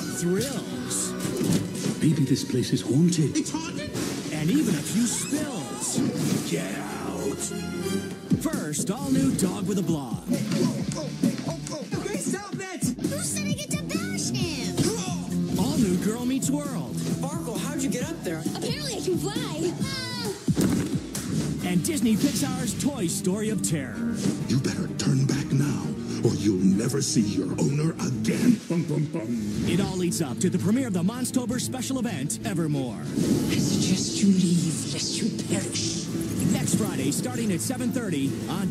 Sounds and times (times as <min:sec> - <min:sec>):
Music: 0:00.0 - 0:38.7
Speech: 0:08.4 - 0:11.1, 0:11.7 - 0:20.3, 0:21.6 - 0:38.7.